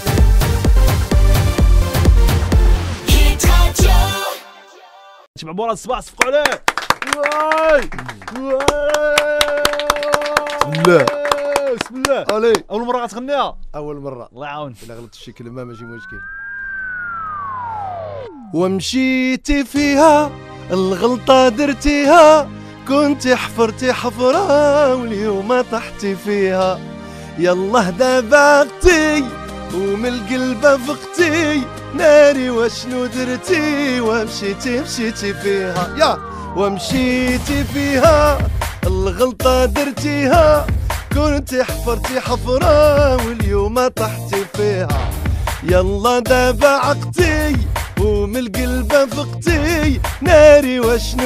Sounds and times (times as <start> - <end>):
Music: 0.0 - 5.3, 7.6 - 12.3, 17.8 - 51.2.